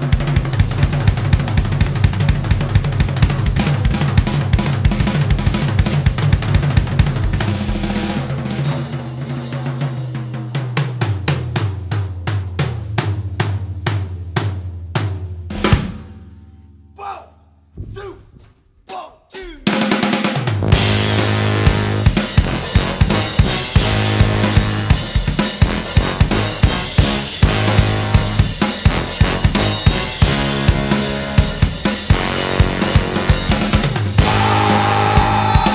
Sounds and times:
Music: 0:00.0 - 0:17.0, 0:19.6 - 0:35.7.

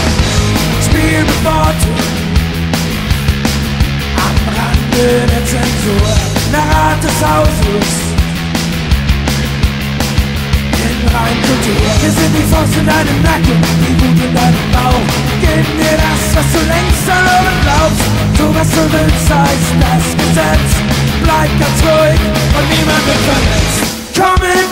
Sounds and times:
Music: 0:00.0 - 0:24.7.

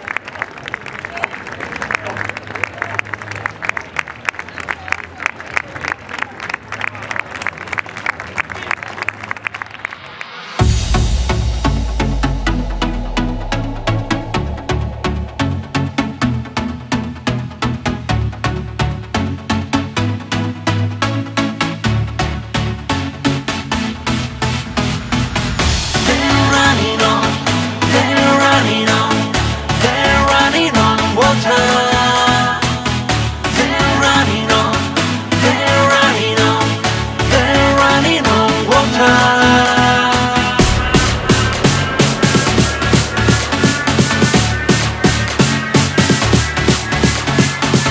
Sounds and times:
Music: 0:09.3 - 0:47.9.

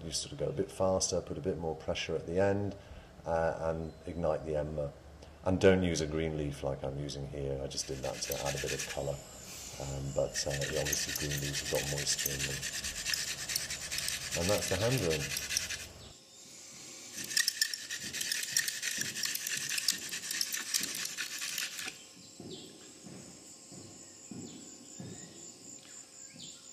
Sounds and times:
Speech: 0:00.0 - 0:09.2, 0:09.8 - 0:12.6, 0:14.4 - 0:15.3.

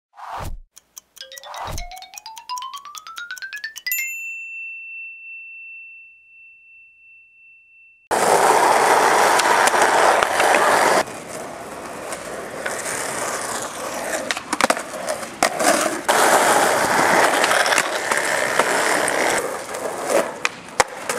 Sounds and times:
Bicycle bell: 0:01.2 - 0:08.7
Skateboard: 0:08.1 - 0:21.1.

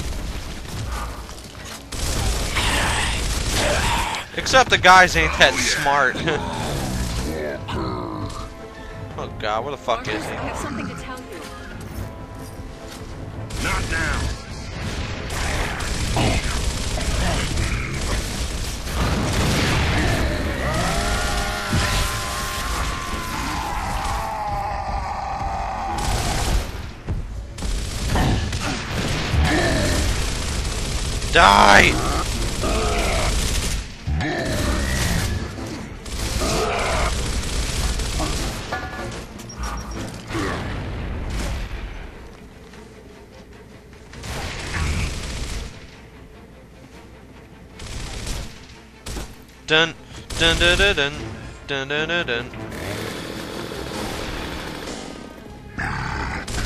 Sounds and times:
Music: 0:00.0 - 0:56.6.

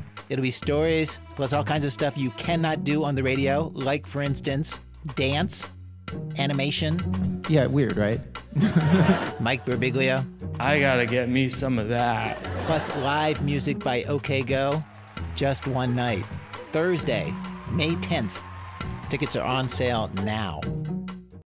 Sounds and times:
Music: 0:00.0 - 0:21.4
Speech: 0:00.3 - 0:05.7, 0:06.4 - 0:08.2, 0:09.4 - 0:14.8, 0:15.4 - 0:18.4, 0:19.1 - 0:20.7.

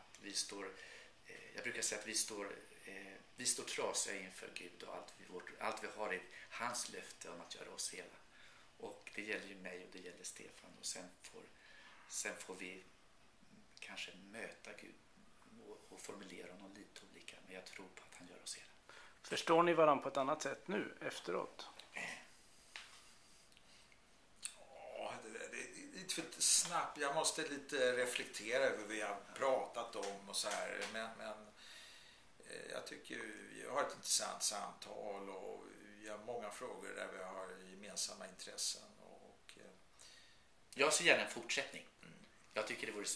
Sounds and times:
Conversation: 0:00.3 - 0:12.9, 0:13.8 - 0:23.8, 0:24.4 - 0:43.1.

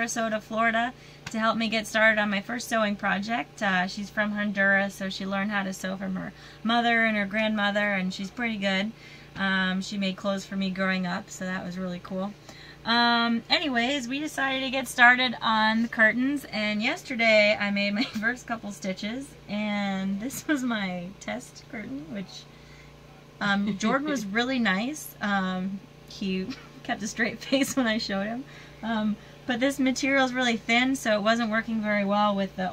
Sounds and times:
Speech: 0:00.0 - 0:22.6, 0:23.2 - 0:32.7.

